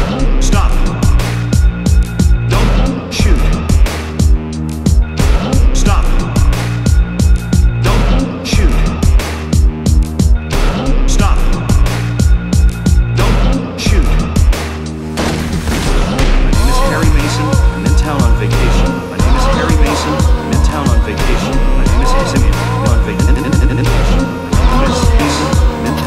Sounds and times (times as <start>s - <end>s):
Music: 0.0s - 26.0s.